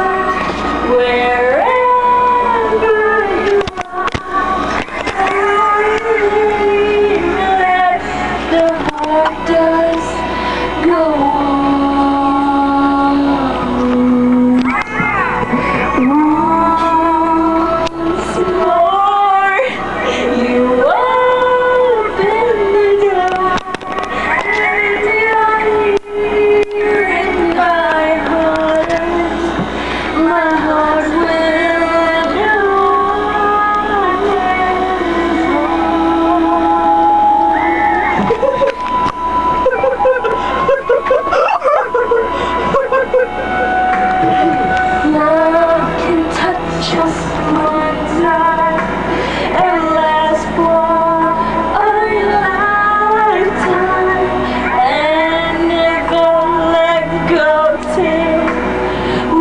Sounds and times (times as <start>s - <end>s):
Female singing: 0.0s - 39.0s, 44.1s - 59.4s
Music: 0.0s - 59.4s.